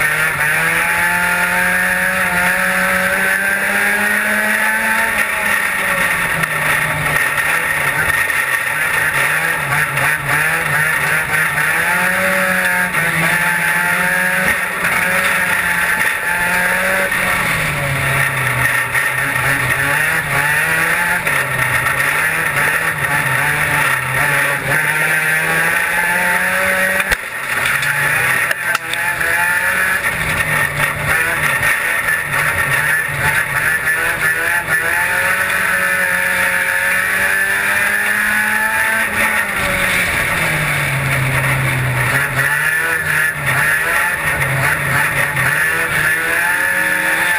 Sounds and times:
Car: 0.0s - 47.3s.

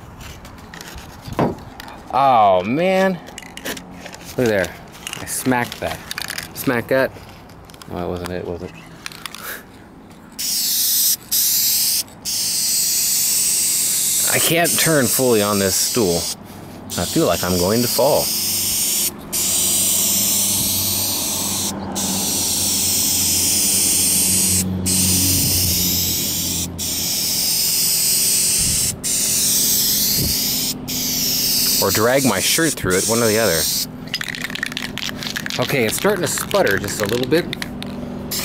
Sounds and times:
Outside, urban or manmade: 0.0s - 38.4s
Vehicle: 0.0s - 38.4s
Speech: 2.1s - 3.2s, 4.4s - 6.0s, 6.6s - 7.1s, 7.9s - 8.7s, 14.3s - 16.3s, 17.0s - 18.3s, 31.8s - 33.7s, 35.6s - 37.5s.

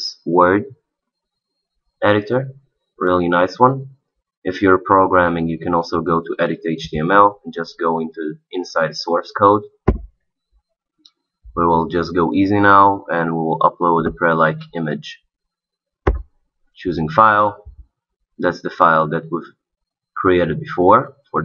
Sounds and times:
Speech: 0.0s - 0.8s, 2.0s - 9.8s, 11.6s - 15.3s, 16.8s - 17.8s, 18.4s - 19.6s, 20.2s - 21.4s.

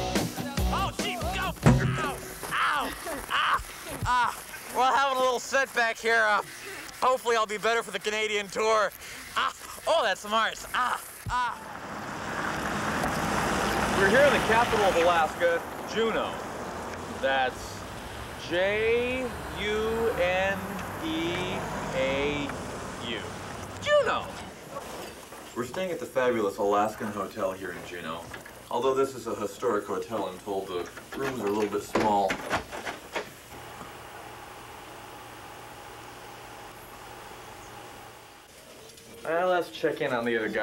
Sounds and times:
Outside, urban or manmade: 0.0s - 40.6s.

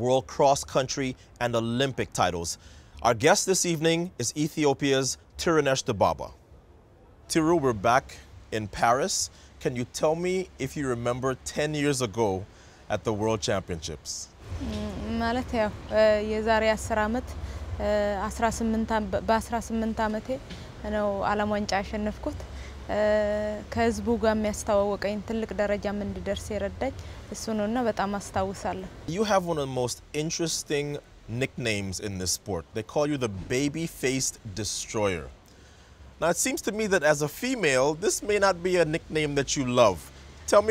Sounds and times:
Speech: 7.3s - 35.3s, 36.2s - 40.7s.

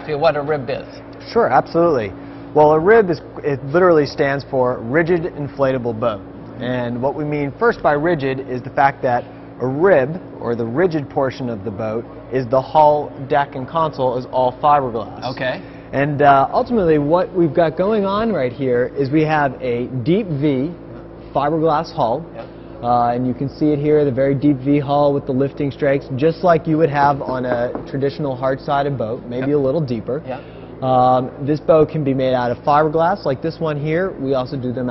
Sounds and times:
Speech: 0.0s - 20.8s, 21.4s - 34.9s.

